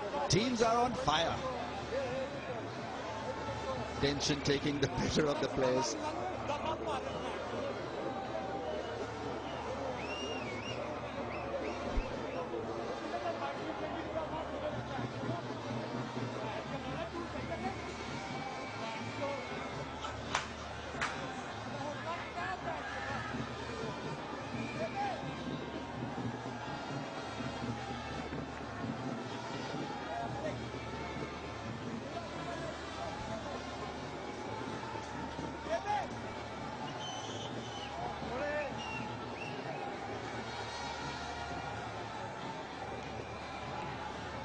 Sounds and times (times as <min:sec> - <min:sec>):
Speech: 0:04.0 - 0:07.2.